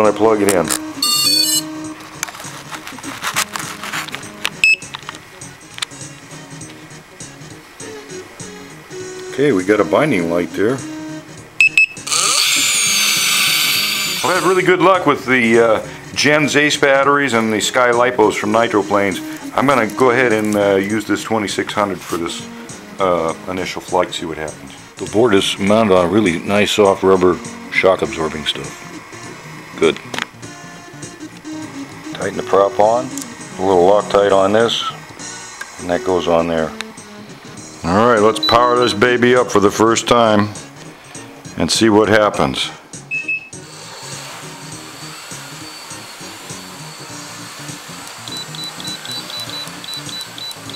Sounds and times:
Speech: 0.0s - 0.7s, 9.3s - 10.8s, 14.2s - 28.8s, 29.8s - 30.1s, 32.2s - 35.0s, 35.8s - 36.8s, 37.8s - 40.6s, 41.6s - 42.8s
Music: 0.0s - 50.7s.

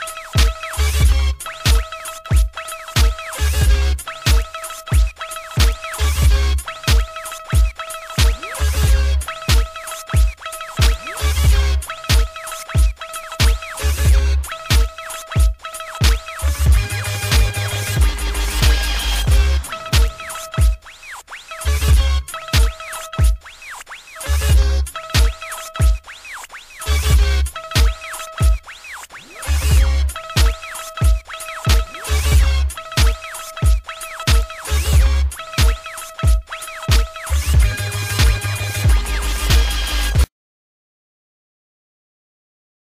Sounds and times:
Hip hop music: 0.0s - 40.3s.

